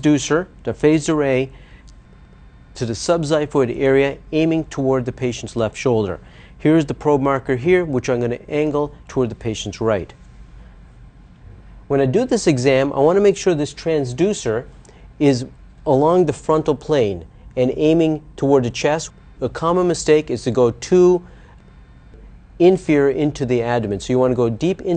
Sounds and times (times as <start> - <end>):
Speech: 0.0 - 1.6, 2.8 - 10.2, 11.9 - 21.3, 22.6 - 24.9.